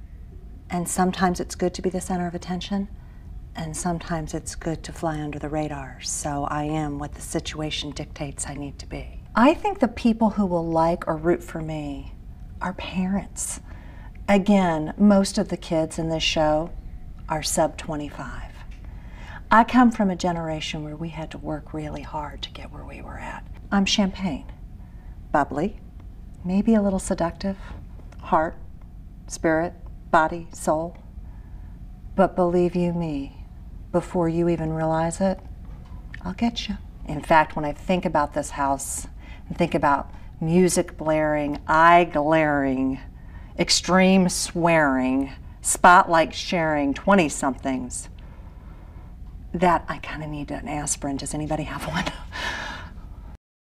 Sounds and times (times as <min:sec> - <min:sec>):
Speech: 0:00.7 - 0:02.9, 0:03.6 - 0:13.6, 0:14.3 - 0:18.7, 0:19.5 - 0:24.6, 0:25.4 - 0:25.8, 0:26.4 - 0:28.6, 0:29.3 - 0:31.0, 0:32.2 - 0:33.4, 0:34.0 - 0:35.4, 0:36.2 - 0:48.1, 0:49.6 - 0:52.3.